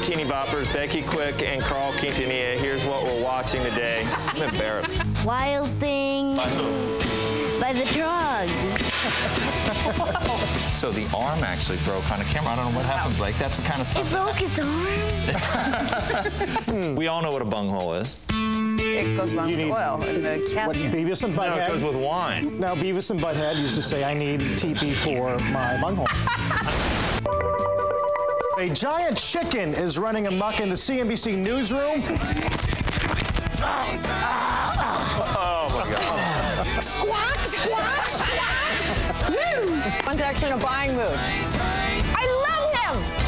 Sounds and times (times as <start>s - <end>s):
Music: 0.0s - 43.2s.